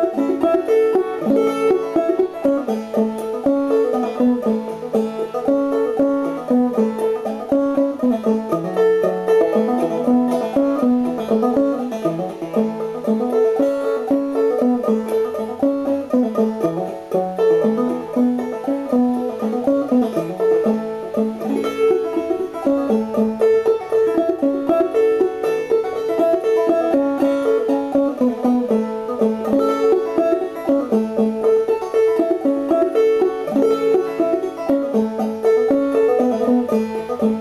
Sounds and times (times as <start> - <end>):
Banjo: 0.0 - 37.4.